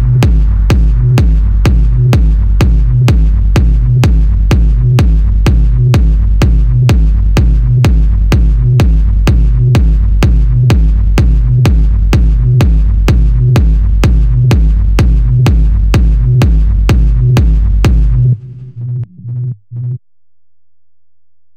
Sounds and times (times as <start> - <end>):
Music: 0.0 - 20.0.